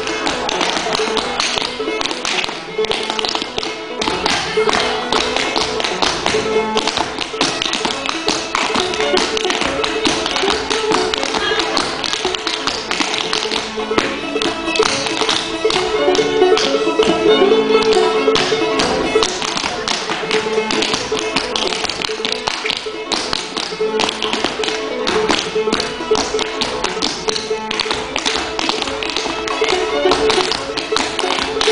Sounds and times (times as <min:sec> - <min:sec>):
Musical instrument: 0:00.0 - 0:31.7.